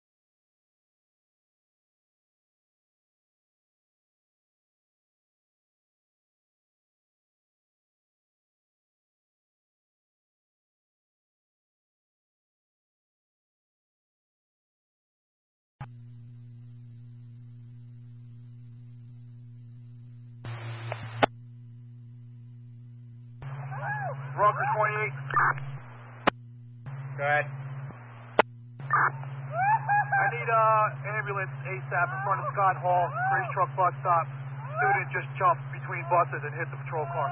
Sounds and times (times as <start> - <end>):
Speech: 24.4 - 25.6, 27.2 - 27.5, 30.1 - 37.3.